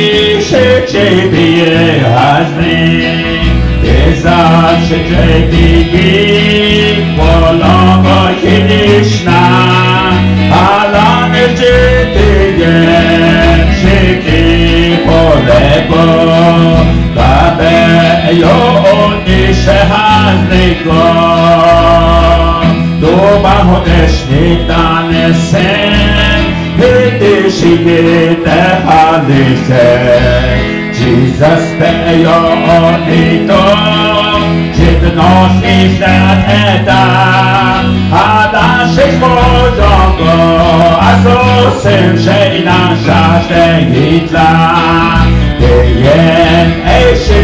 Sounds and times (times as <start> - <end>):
Gospel music: 0.0 - 47.4.